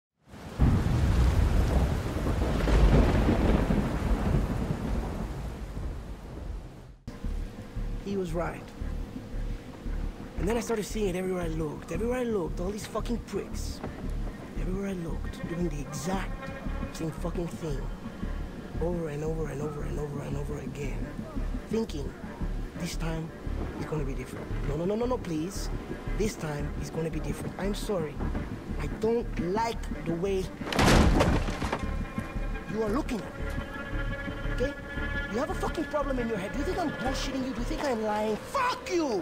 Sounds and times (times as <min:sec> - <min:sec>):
Music: 0:07.1 - 0:39.2
Speech: 0:08.0 - 0:08.7, 0:10.4 - 0:13.8, 0:14.6 - 0:17.9, 0:18.8 - 0:28.2, 0:28.8 - 0:30.5, 0:32.7 - 0:33.3, 0:34.6 - 0:39.2.